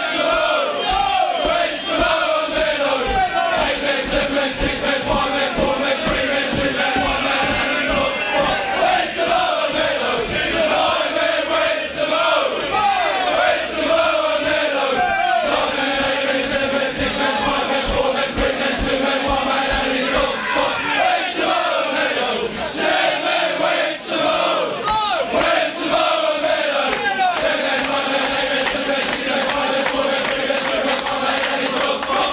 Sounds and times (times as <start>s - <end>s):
Music: 0.2s - 12.6s, 13.4s - 22.2s
Male singing: 0.4s - 12.5s, 13.3s - 22.3s
Speech: 24.5s - 25.5s, 26.9s - 27.6s.